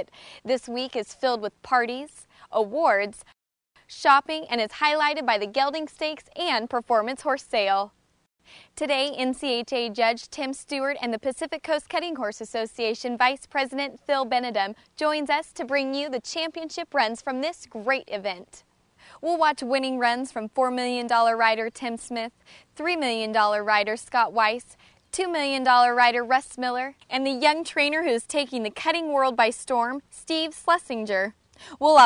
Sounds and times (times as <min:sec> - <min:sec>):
Speech: 0:00.0 - 0:03.3, 0:03.9 - 0:07.9, 0:08.8 - 0:18.6, 0:19.2 - 0:32.0.